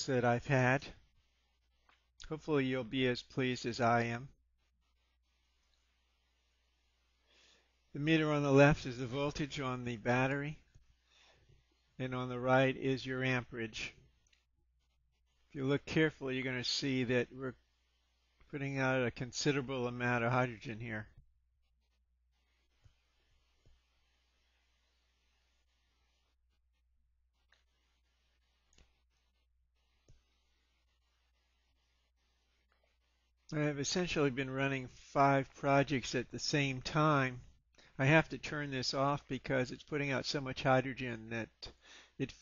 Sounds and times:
Speech: 0.0s - 1.0s, 2.2s - 4.4s, 8.0s - 10.6s, 12.0s - 14.0s, 15.6s - 17.6s, 18.5s - 21.2s, 33.5s - 37.4s, 38.0s - 42.4s.

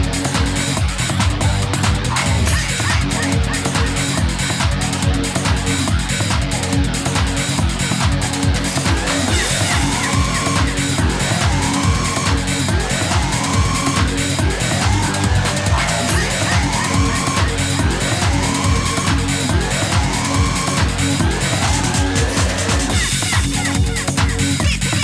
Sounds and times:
Music: 0.0s - 25.0s.

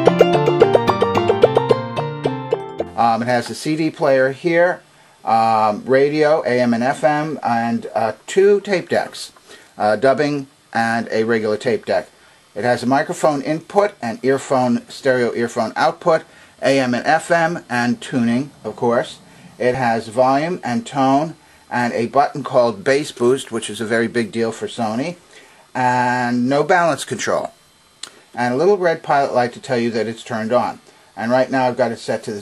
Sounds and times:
Speech: 3.0s - 25.2s, 25.8s - 27.6s, 28.4s - 32.4s.

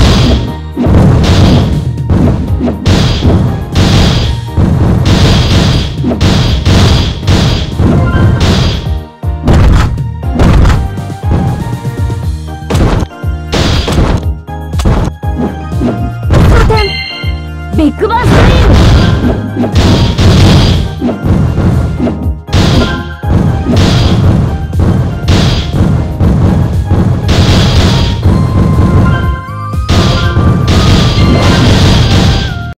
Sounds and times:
Music: 0.0s - 32.7s.

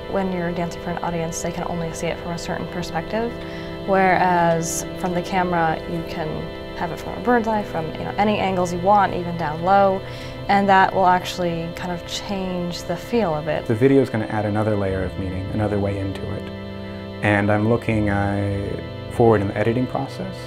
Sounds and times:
Music: 0.0s - 20.4s
Speech: 0.2s - 3.3s, 3.9s - 16.4s, 17.2s - 20.4s.

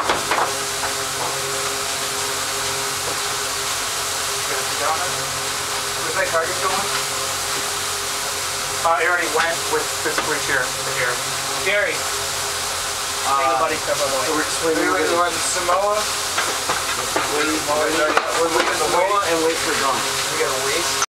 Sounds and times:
Speech: 4.5s - 5.2s, 6.0s - 6.9s, 8.8s - 12.0s, 13.2s - 16.1s, 17.2s - 21.0s.

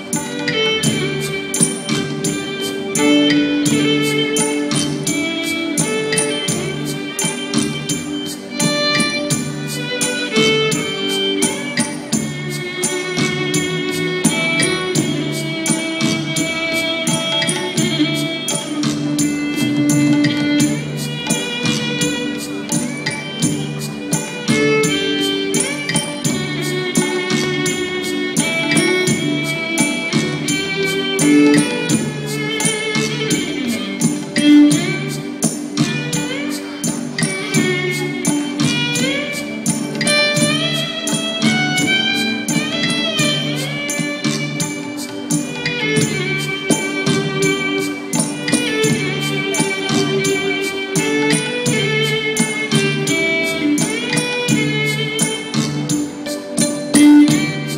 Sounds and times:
Traditional music: 0.0s - 57.7s.

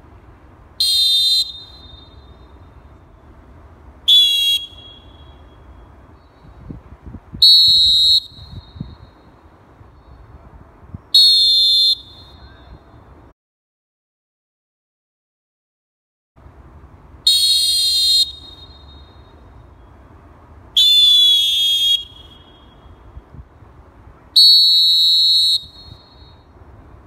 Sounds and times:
Whistle: 0.8s - 2.9s, 4.1s - 6.6s, 7.4s - 9.4s, 11.0s - 13.0s, 17.3s - 19.8s, 20.8s - 23.1s, 24.4s - 26.5s.

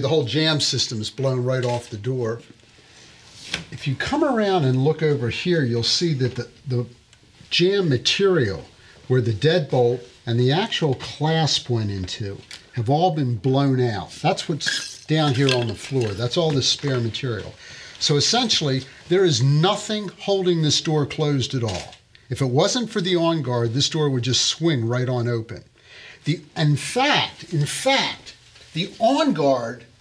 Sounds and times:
Speech: 0.0s - 2.5s, 3.7s - 25.7s, 26.3s - 29.9s.

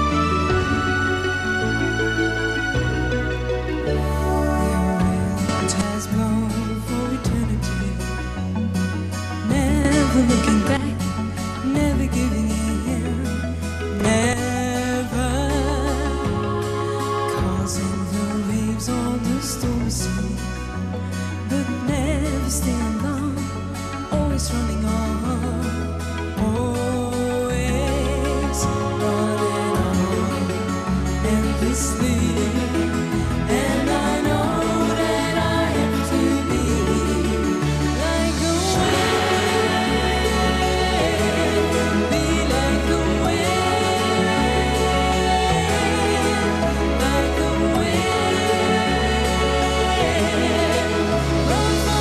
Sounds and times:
Music: 0.0s - 52.0s.

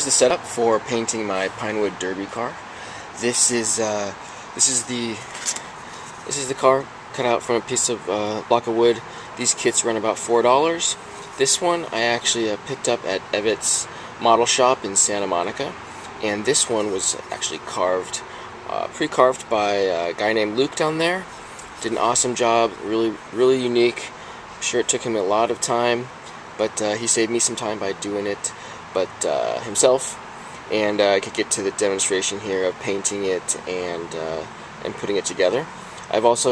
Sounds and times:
Speech: 0.0s - 5.3s, 6.2s - 36.5s.

